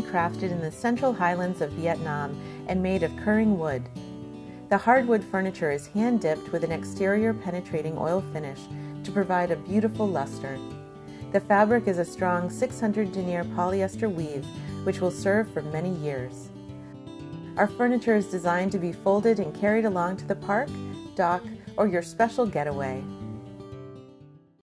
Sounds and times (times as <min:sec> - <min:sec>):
Speech: 0:00.0 - 0:03.9, 0:04.7 - 0:10.6, 0:11.4 - 0:16.5, 0:17.6 - 0:23.1
Music: 0:00.0 - 0:24.6.